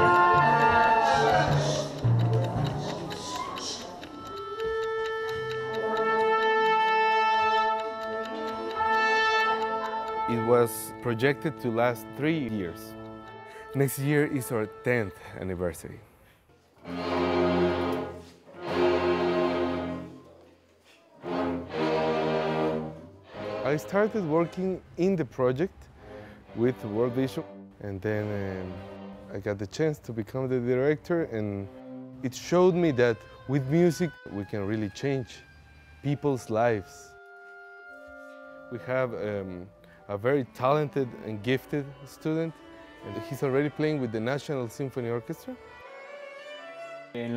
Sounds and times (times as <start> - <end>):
Music: 0.0 - 16.1, 16.8 - 47.3
Speech: 13.8 - 16.0, 23.6 - 25.7, 26.6 - 35.4, 38.7 - 42.5, 43.1 - 45.6, 47.2 - 47.3.